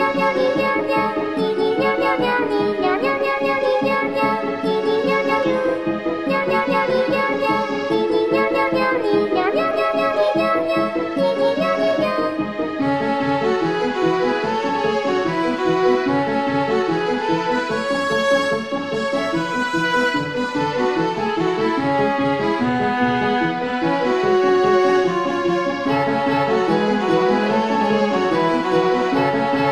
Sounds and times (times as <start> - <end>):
Soundtrack music: 0.0 - 29.7.